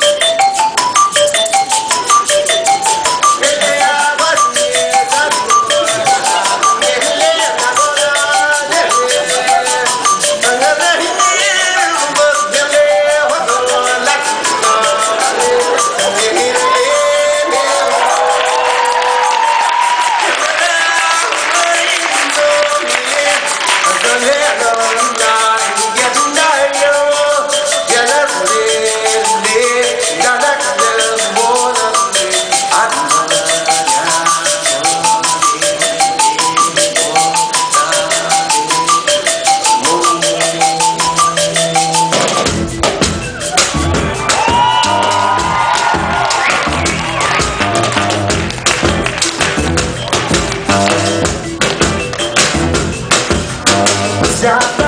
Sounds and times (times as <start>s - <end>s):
Music: 0.0s - 54.8s.